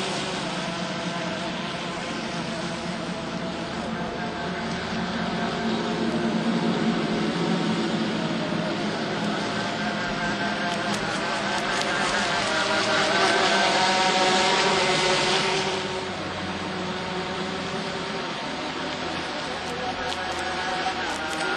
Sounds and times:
Motorboat, speedboat: 0.0s - 21.5s
Sailboat, sailing ship: 0.0s - 21.5s.

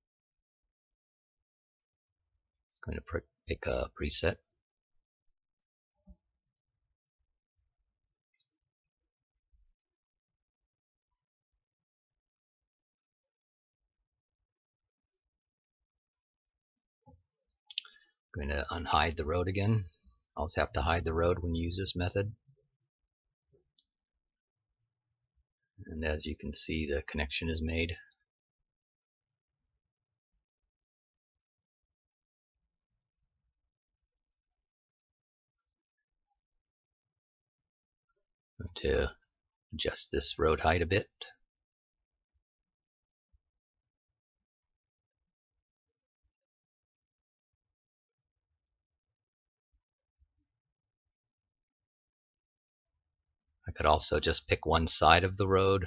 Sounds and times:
Narration, monologue: 2.7s - 4.6s, 17.6s - 22.6s, 25.7s - 28.3s, 38.6s - 41.5s, 53.7s - 55.8s.

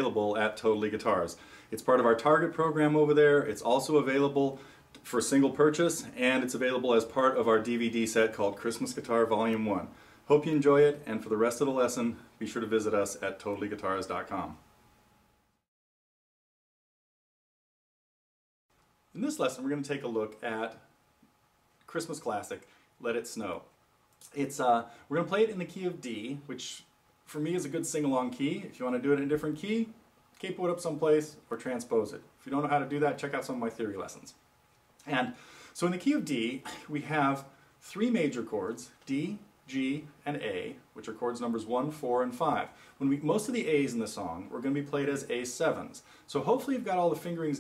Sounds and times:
Speech: 0.0s - 14.6s, 19.1s - 20.9s, 21.9s - 34.4s, 35.0s - 47.6s.

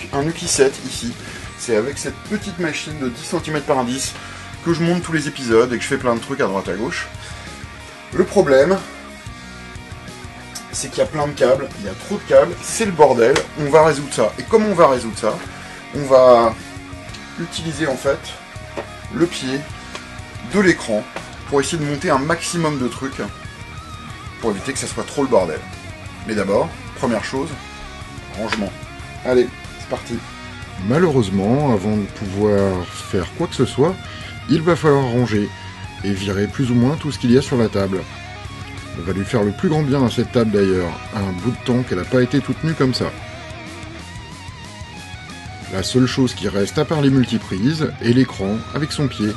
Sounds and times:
Speech: 0.0s - 7.1s, 8.1s - 8.9s, 10.6s - 16.6s, 17.4s - 18.4s, 19.1s - 19.7s, 20.4s - 23.3s, 24.4s - 27.6s, 28.3s - 30.2s, 30.8s - 38.1s, 38.9s - 43.2s, 45.7s - 49.3s
Music: 0.0s - 49.3s.

